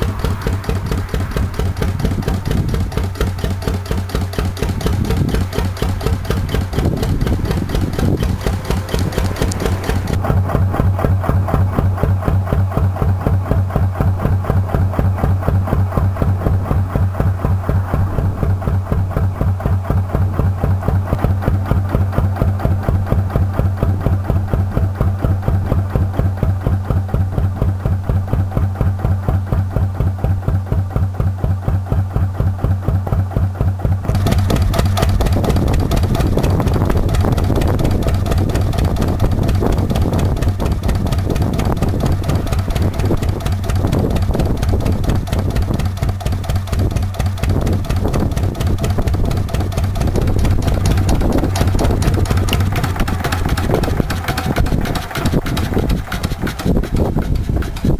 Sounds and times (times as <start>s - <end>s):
Engine: 0.0s - 57.9s.